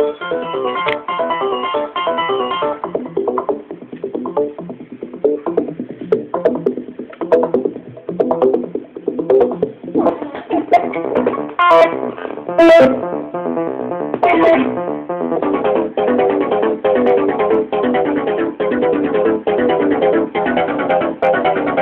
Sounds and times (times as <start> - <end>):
Techno: 0.0 - 21.8.